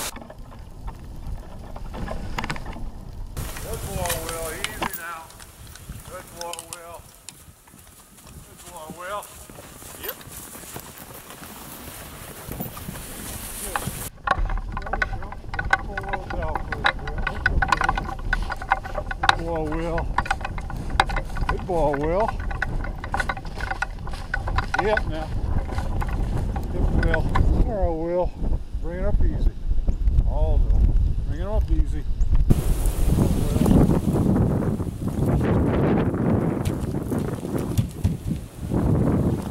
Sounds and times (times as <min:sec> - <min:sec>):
Speech: 0:03.6 - 0:05.3, 0:06.1 - 0:07.0, 0:08.5 - 0:09.3, 0:15.8 - 0:17.4, 0:19.3 - 0:20.1, 0:21.5 - 0:22.4, 0:24.8 - 0:25.3, 0:26.7 - 0:29.6, 0:30.3 - 0:30.7, 0:31.3 - 0:32.1.